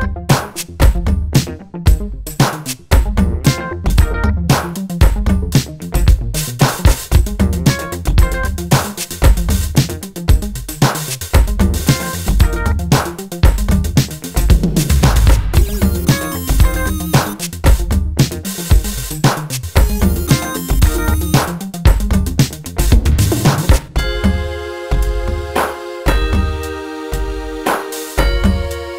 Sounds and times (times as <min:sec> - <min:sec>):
Bass drum: 0:00.0 - 0:26.6
Drum kit: 0:00.0 - 0:28.9.